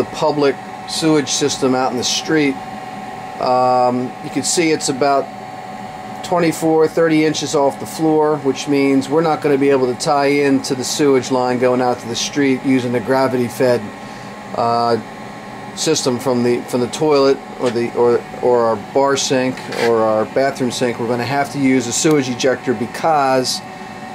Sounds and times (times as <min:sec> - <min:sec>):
Speech: 0:00.0 - 0:02.6, 0:03.4 - 0:05.3, 0:06.2 - 0:14.0, 0:14.6 - 0:15.1, 0:15.8 - 0:23.7.